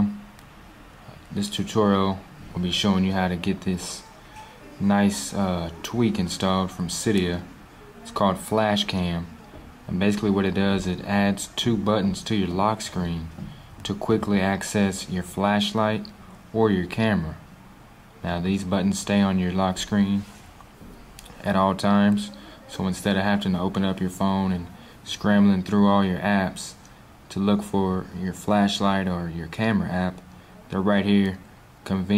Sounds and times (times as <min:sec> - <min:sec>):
Speech: 0:00.0 - 0:00.2, 0:01.1 - 0:17.5, 0:18.2 - 0:20.5, 0:21.2 - 0:32.1.